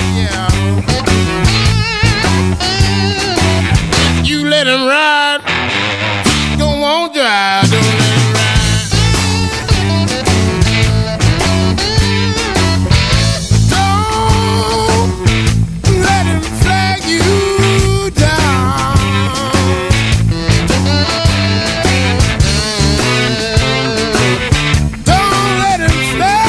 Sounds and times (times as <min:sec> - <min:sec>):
Music: 0:00.0 - 0:26.4.